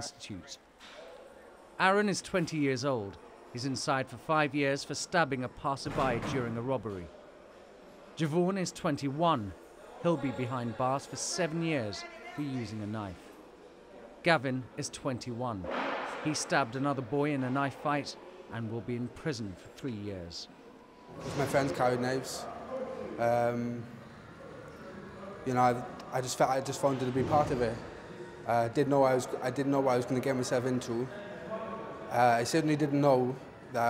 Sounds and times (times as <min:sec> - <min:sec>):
Speech: 0:00.0 - 0:00.6, 0:01.8 - 0:07.1, 0:08.2 - 0:13.3.